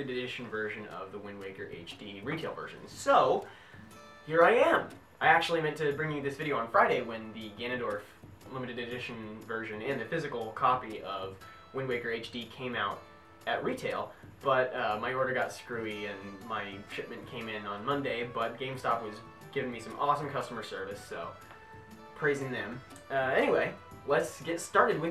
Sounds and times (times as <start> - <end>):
Speech: 0.0 - 3.5, 4.3 - 21.4, 22.2 - 25.1
Music: 0.0 - 25.1.